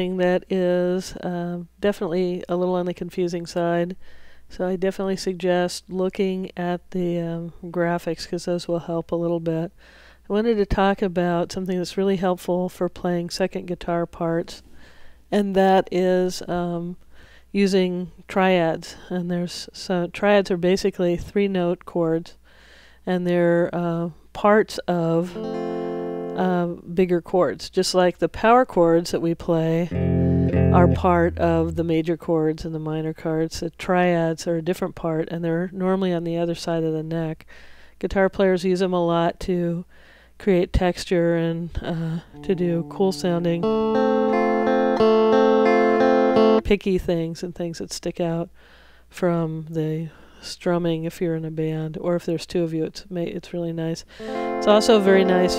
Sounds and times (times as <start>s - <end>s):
Speech: 0.0s - 14.7s, 15.3s - 22.4s, 23.0s - 25.4s, 26.4s - 30.0s, 30.7s - 43.7s, 46.6s - 48.5s, 49.1s - 55.5s
Strum: 29.9s - 32.0s, 42.3s - 46.6s, 54.2s - 55.5s.